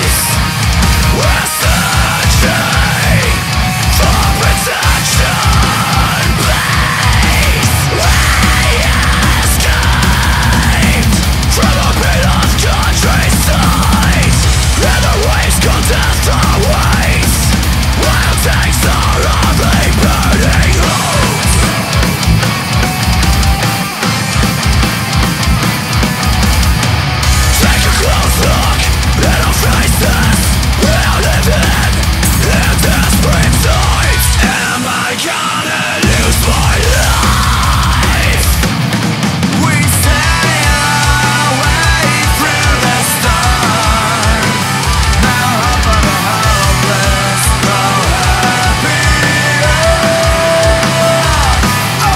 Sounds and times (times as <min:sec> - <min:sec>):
Music: 0:00.0 - 0:52.1.